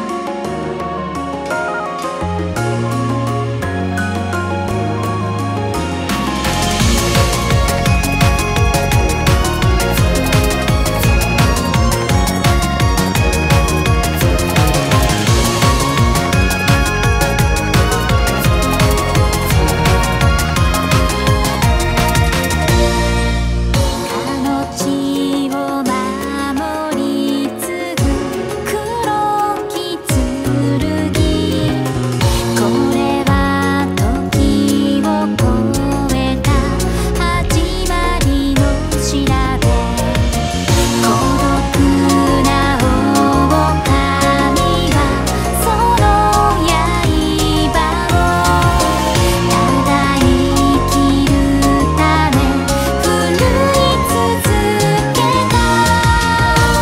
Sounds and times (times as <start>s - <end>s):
Music: 0.0s - 56.8s.